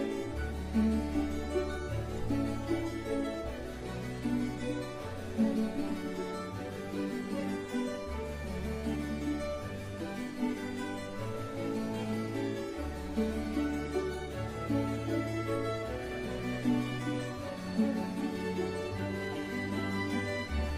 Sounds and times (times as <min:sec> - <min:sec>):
Harpsichord: 0:00.0 - 0:20.7.